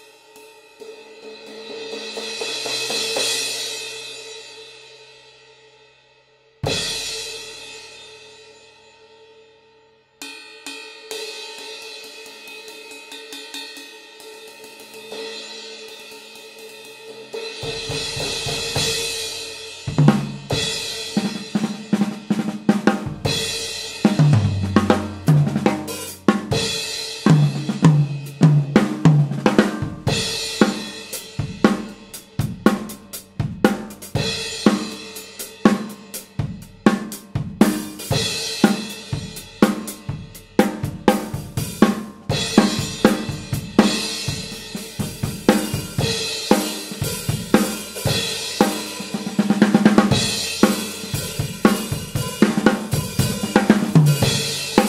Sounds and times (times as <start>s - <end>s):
Bass drum: 22.9s - 30.4s.